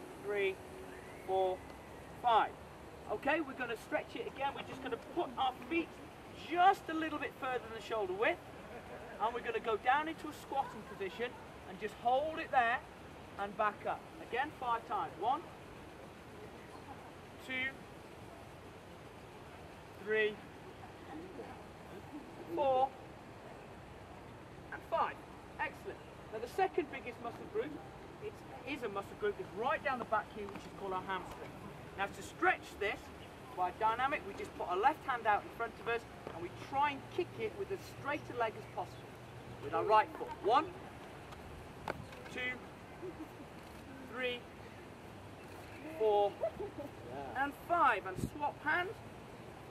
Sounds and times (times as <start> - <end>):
Outside, rural or natural: 0.0 - 49.7.